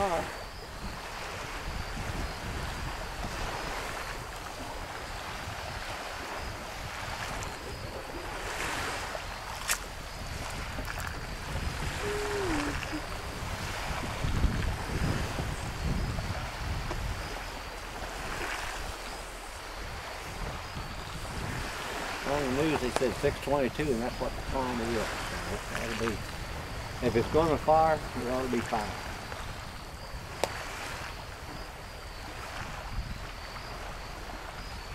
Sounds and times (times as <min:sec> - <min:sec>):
Speech: 0:00.0 - 0:00.4, 0:22.2 - 0:26.2, 0:27.0 - 0:29.0.